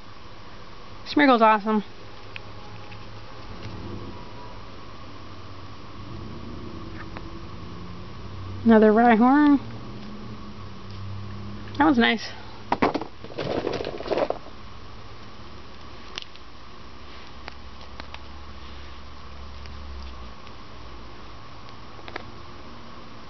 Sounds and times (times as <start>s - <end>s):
Inside, small room: 0.0s - 23.3s
Speech: 1.1s - 1.9s, 8.7s - 9.6s, 11.8s - 12.4s.